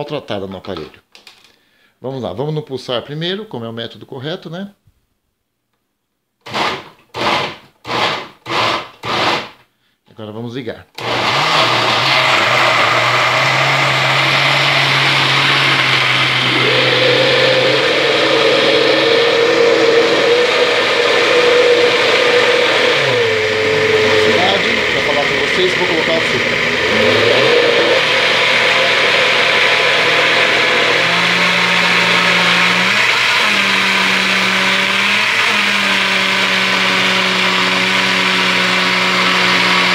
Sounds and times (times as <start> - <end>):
Blender: 6.4 - 9.6, 11.0 - 39.9.